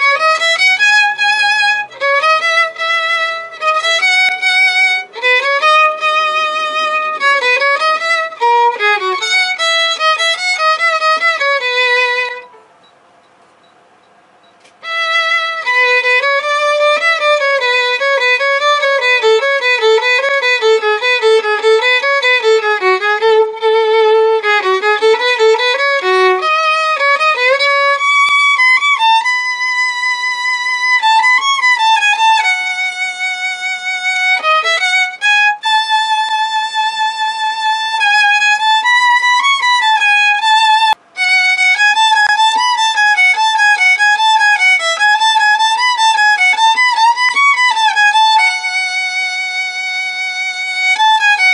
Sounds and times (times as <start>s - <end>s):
Violin, fiddle: 0.0s - 12.6s, 14.7s - 51.5s.